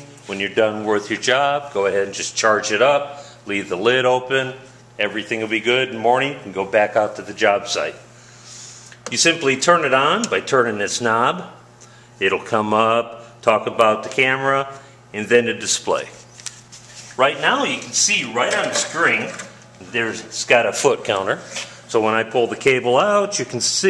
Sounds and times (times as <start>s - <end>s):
Speech: 0.0s - 8.1s, 9.1s - 11.6s, 12.2s - 16.3s, 17.2s - 23.9s.